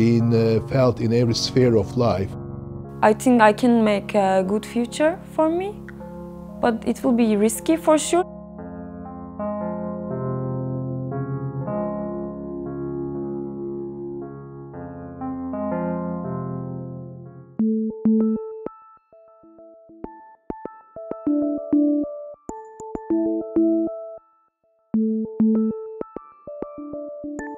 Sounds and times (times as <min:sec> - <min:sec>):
Speech: 0:00.0 - 0:02.4, 0:03.0 - 0:05.8, 0:06.6 - 0:08.2
Music: 0:00.0 - 0:27.5.